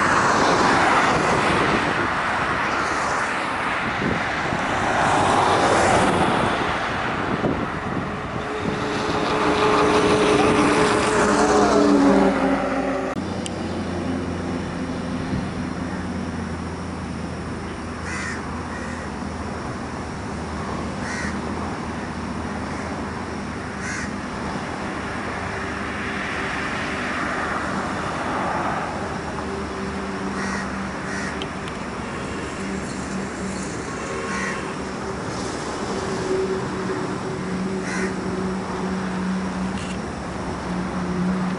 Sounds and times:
Traffic noise, roadway noise: 0:00.0 - 0:41.5.

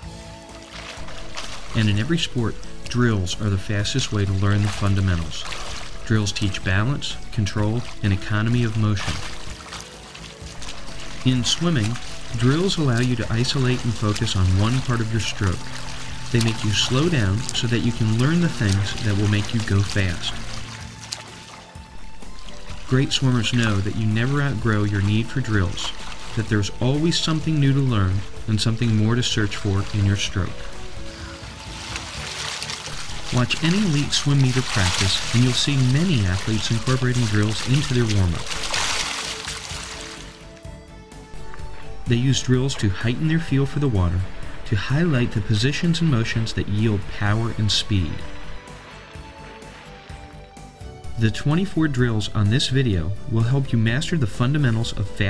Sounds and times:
Music: 0:00.0 - 0:55.2
Water: 0:00.0 - 0:55.2
Speech: 0:01.7 - 0:09.3, 0:11.2 - 0:15.7, 0:16.3 - 0:20.4, 0:22.8 - 0:30.7, 0:33.3 - 0:38.5, 0:42.0 - 0:48.3, 0:51.1 - 0:55.2.

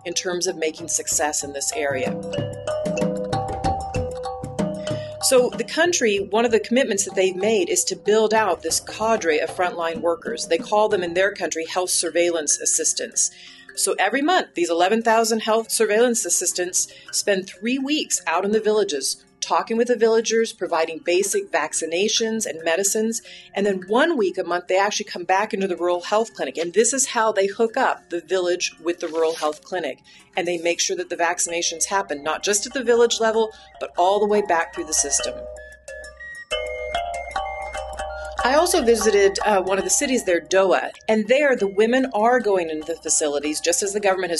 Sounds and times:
Speech: 0:00.0 - 0:02.1, 0:05.2 - 0:35.3, 0:38.4 - 0:44.3
Glockenspiel: 0:01.1 - 0:11.4, 0:32.3 - 0:44.3.

